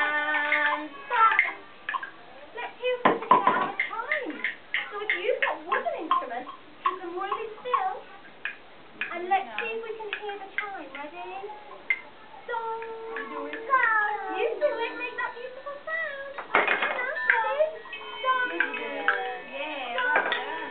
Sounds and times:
Speech: 12.3s - 16.4s.

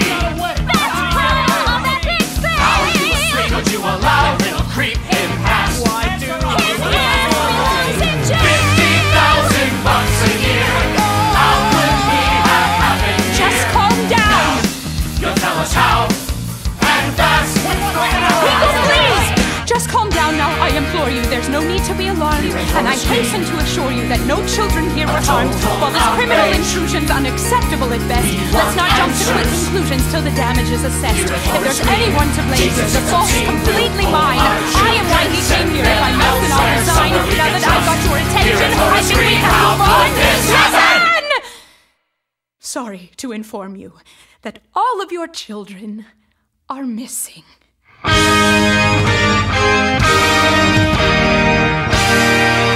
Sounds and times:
Hip hop music: 0.0s - 41.1s
Speech: 13.6s - 14.6s, 18.1s - 41.4s, 42.6s - 47.6s.

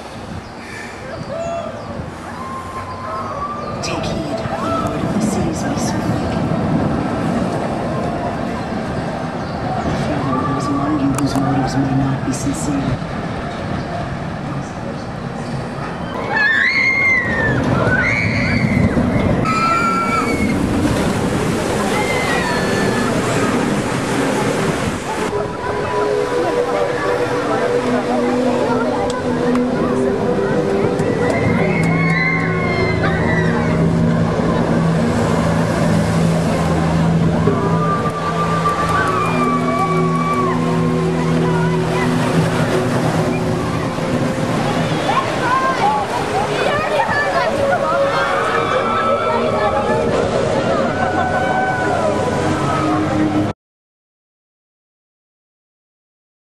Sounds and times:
Outside, urban or manmade: 0.0s - 53.6s
Music: 25.3s - 53.5s.

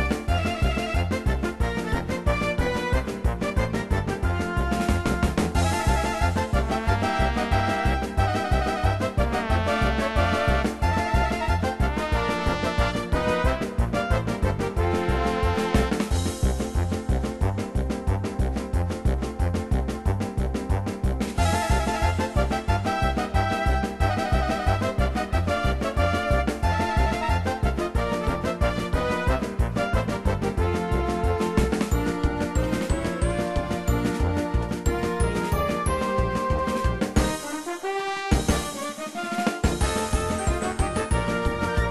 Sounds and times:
Music: 0.0s - 41.9s.

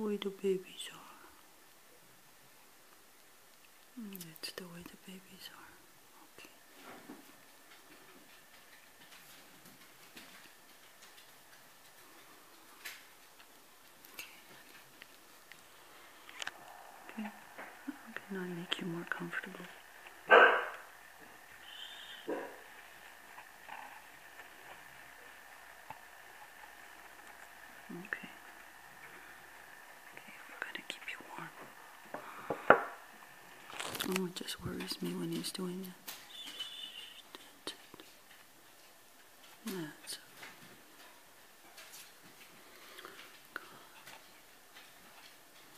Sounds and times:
Speech: 0.0s - 1.3s, 17.1s - 19.8s, 34.0s - 36.0s, 39.6s - 40.3s
Whispering: 0.0s - 1.4s, 4.0s - 6.6s, 14.1s - 14.8s, 16.9s - 19.9s, 27.9s - 28.5s, 30.0s - 31.8s, 34.0s - 36.0s, 37.0s - 37.9s, 39.6s - 40.4s, 43.6s - 44.1s
Animal: 21.6s - 22.8s, 36.3s - 37.3s.

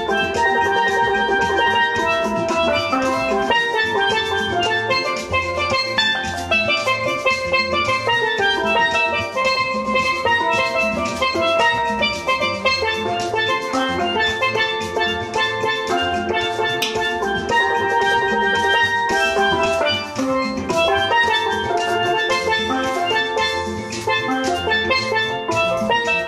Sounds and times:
Percussion: 0.0s - 26.2s.

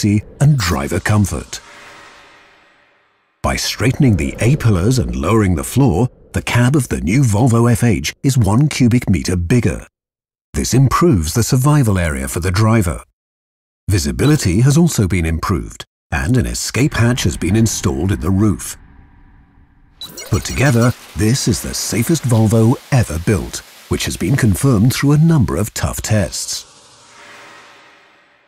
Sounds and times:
Speech: 0.0s - 1.6s, 3.4s - 9.9s, 10.6s - 13.1s, 13.9s - 18.8s, 20.2s - 26.7s.

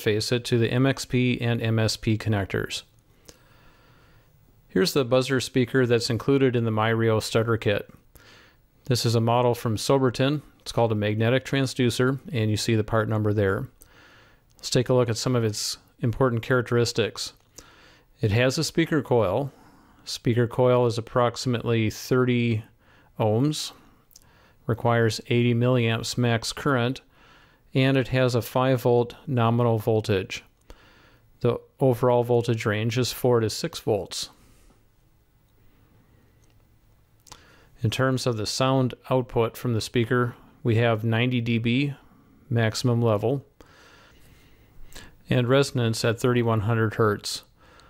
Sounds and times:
Speech: 0.0s - 2.9s, 4.7s - 8.0s, 8.8s - 13.8s, 14.6s - 17.4s, 18.2s - 23.8s, 24.6s - 27.1s, 27.7s - 30.5s, 31.4s - 34.4s, 37.8s - 43.5s, 45.2s - 47.5s.

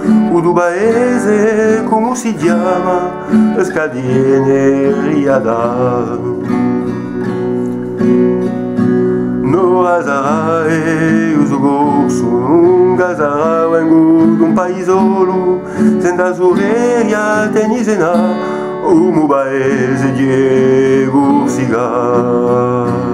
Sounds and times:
Acoustic guitar: 0.0s - 23.1s.

